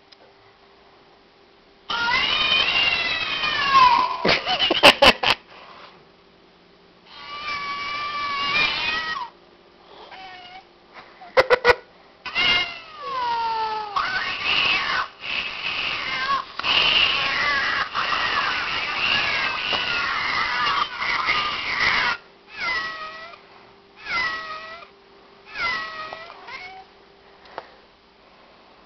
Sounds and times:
Meow: 1.9 - 4.2, 7.2 - 9.3, 10.1 - 10.7, 12.3 - 15.1, 15.8 - 16.4, 17.2 - 23.4, 24.0 - 24.9, 25.5 - 26.9.

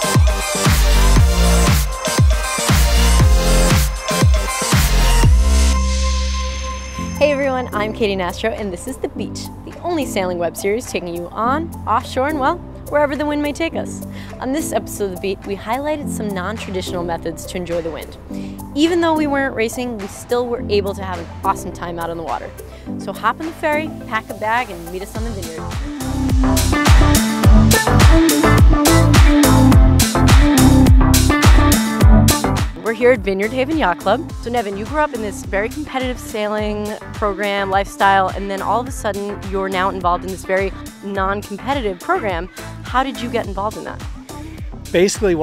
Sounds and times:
Music: 0.0 - 45.4
Speech: 7.2 - 18.2, 18.8 - 25.6, 32.8 - 44.0, 45.0 - 45.4.

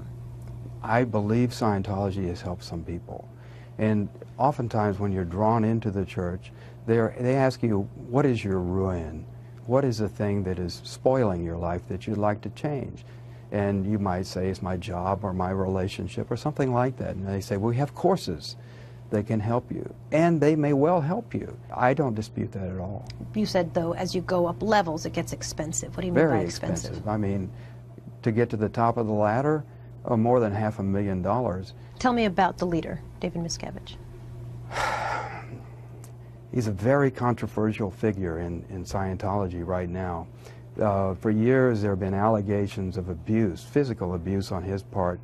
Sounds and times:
Speech: 0.9 - 27.5, 28.2 - 33.9, 36.6 - 45.2.

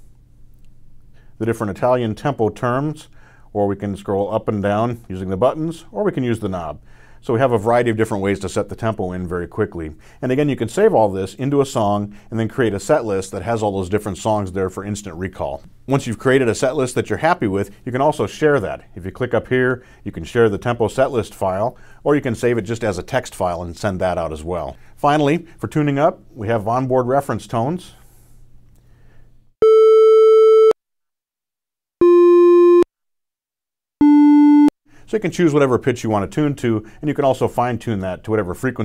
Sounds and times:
Speech: 1.4 - 28.0, 35.1 - 38.8.

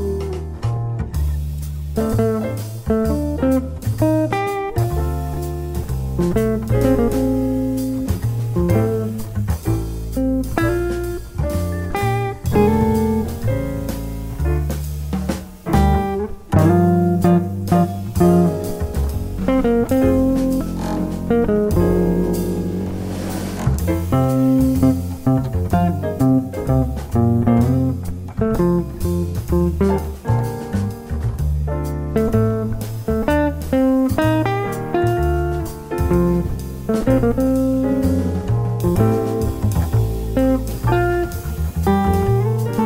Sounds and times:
Guitar: 0.0 - 42.8
Jazz: 0.0 - 42.8
Piano: 0.0 - 42.8.

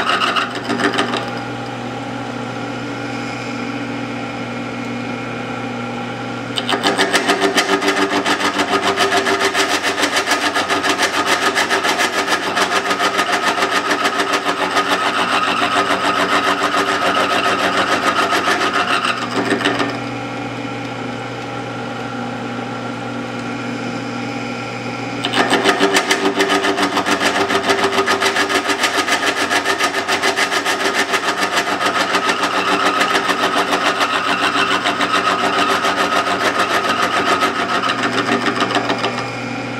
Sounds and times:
Tools: 0.0 - 1.4, 6.6 - 20.1, 25.2 - 39.3.

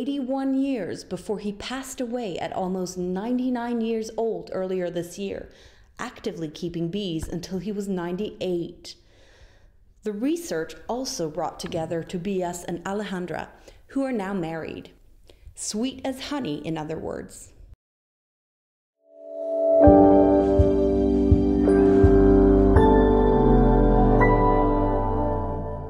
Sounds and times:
Speech: 0.0 - 9.0, 10.0 - 15.0, 15.6 - 17.6
Music: 19.0 - 25.8.

